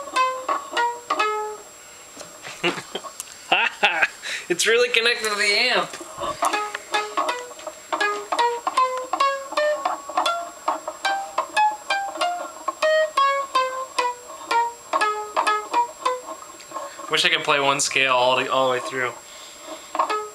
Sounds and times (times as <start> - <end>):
Guitar: 0.0 - 20.3
Speech: 4.5 - 6.0, 17.1 - 19.2.